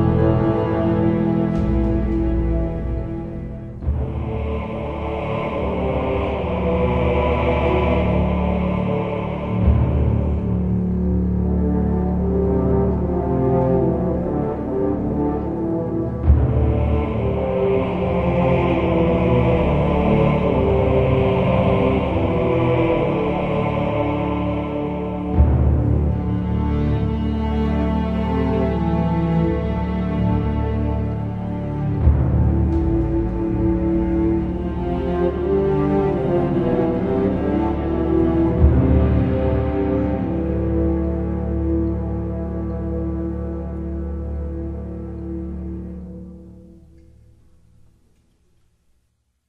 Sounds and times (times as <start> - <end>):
Music: 0.0 - 49.4.